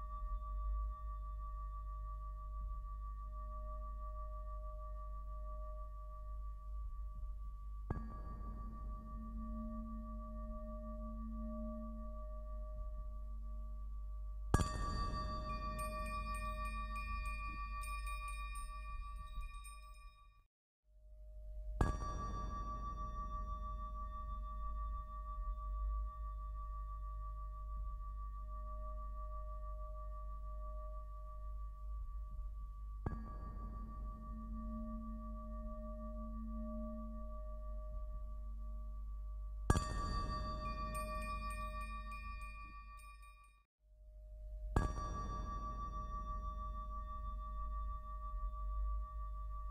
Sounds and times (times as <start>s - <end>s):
Music: 0.0s - 49.7s
Glass: 14.6s - 20.2s, 39.7s - 43.6s.